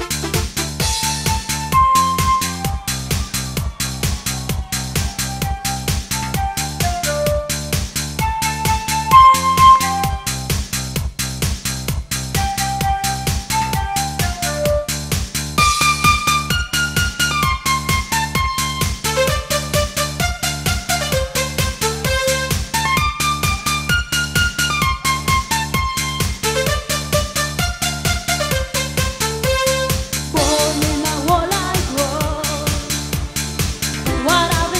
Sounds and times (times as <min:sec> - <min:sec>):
Techno: 0:00.0 - 0:34.8.